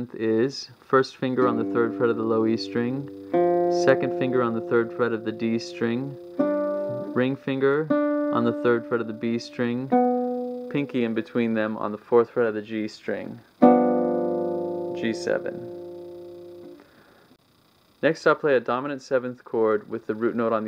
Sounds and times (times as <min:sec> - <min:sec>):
Speech: 0:00.0 - 0:03.1, 0:03.8 - 0:06.2, 0:07.0 - 0:09.9, 0:10.7 - 0:13.4, 0:15.0 - 0:15.6, 0:18.0 - 0:20.6
Acoustic guitar: 0:01.4 - 0:11.7, 0:13.6 - 0:17.2
Strum: 0:01.4 - 0:11.8, 0:13.6 - 0:17.0.